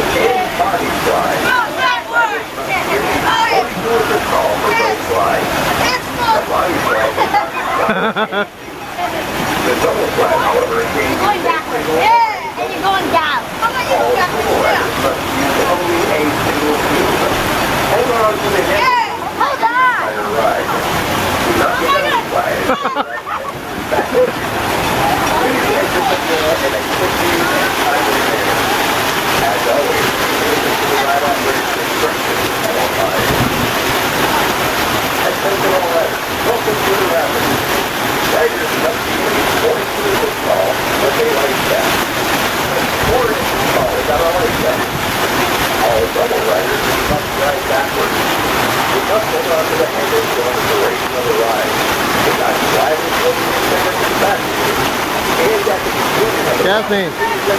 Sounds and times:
Speech: 0.0 - 8.1, 25.0 - 28.7, 29.4 - 33.4, 38.3 - 41.9, 42.7 - 45.0, 45.8 - 48.2, 49.0 - 54.5, 55.4 - 57.5
Stream: 0.0 - 57.5.

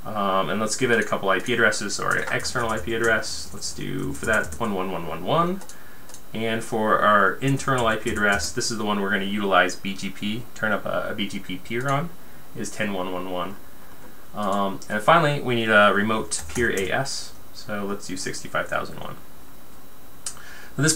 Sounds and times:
Speech: 0.0 - 5.7, 6.3 - 13.6, 14.4 - 19.2
Computer keyboard: 2.0 - 3.2, 4.2 - 4.7, 5.6 - 6.2, 7.5 - 8.5, 11.8 - 12.0, 16.4 - 16.9.

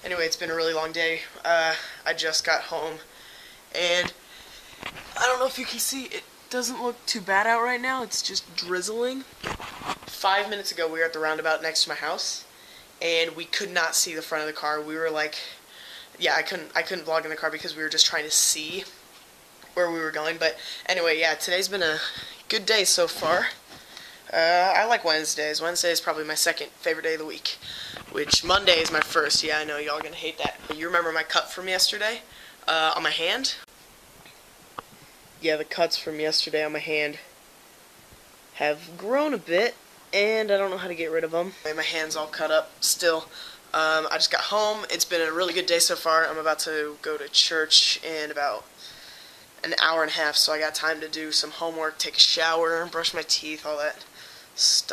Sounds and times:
Speech: 0.0 - 3.1, 3.7 - 4.2, 5.1 - 9.3, 10.1 - 15.6, 16.2 - 19.0, 19.7 - 23.6, 24.3 - 33.7, 35.4 - 37.3, 38.6 - 48.7, 49.6 - 54.9.

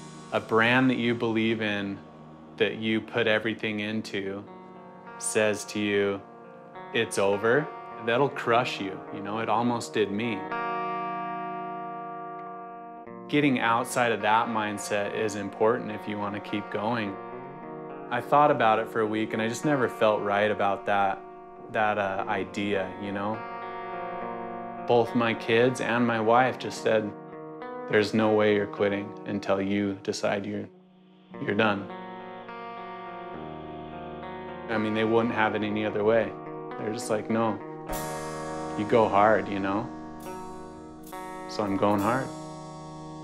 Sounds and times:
Music: 0.0 - 43.2
Speech: 0.4 - 2.0, 2.6 - 4.5, 5.2 - 6.2, 7.0 - 10.5, 13.3 - 17.2, 18.1 - 23.4, 24.9 - 27.2, 27.9 - 30.7, 31.4 - 31.9, 34.7 - 37.6, 38.8 - 39.9, 41.5 - 42.3.

